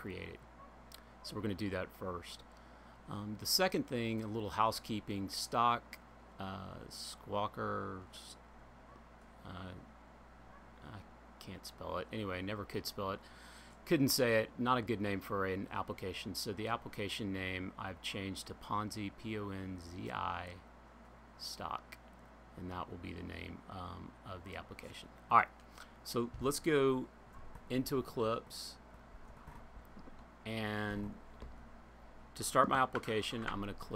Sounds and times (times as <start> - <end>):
Speech: 0.0 - 0.4, 1.2 - 2.5, 3.1 - 8.4, 9.4 - 9.9, 10.8 - 13.2, 13.8 - 20.6, 21.4 - 22.0, 22.6 - 27.1, 27.7 - 28.8, 30.5 - 31.2, 32.4 - 33.9.